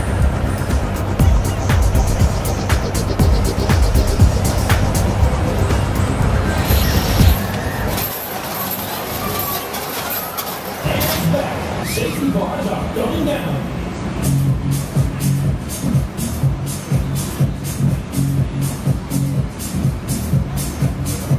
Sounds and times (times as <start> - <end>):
Music: 0.0 - 8.6, 14.1 - 21.3
Speech: 10.8 - 13.8.